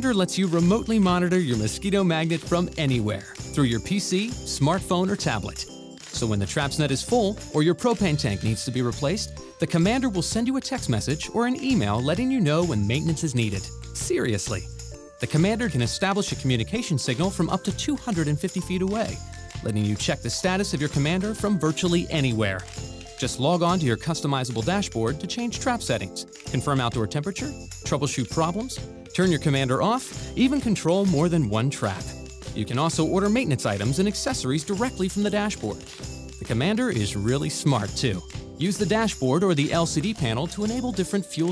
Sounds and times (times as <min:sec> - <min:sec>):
Speech: 0:00.0 - 0:35.8, 0:36.4 - 0:41.5
Music: 0:00.0 - 0:41.5.